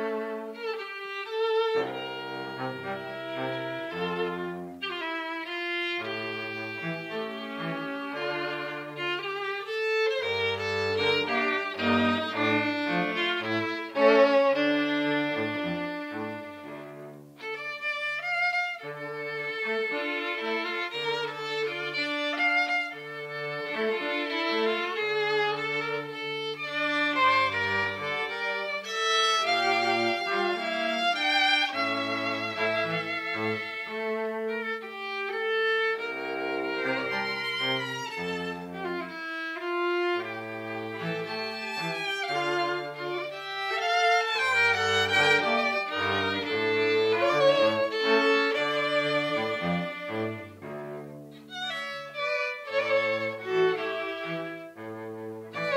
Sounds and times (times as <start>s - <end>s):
Soul music: 0.0s - 55.7s.